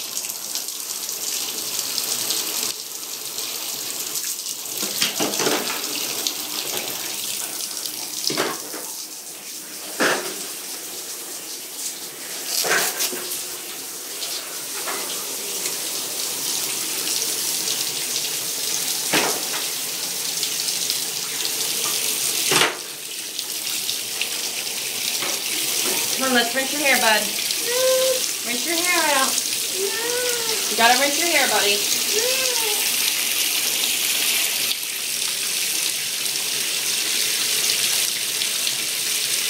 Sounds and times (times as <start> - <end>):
Bathtub (filling or washing): 0.0 - 39.5
Water: 0.0 - 39.5
Water tap, faucet: 0.0 - 39.5.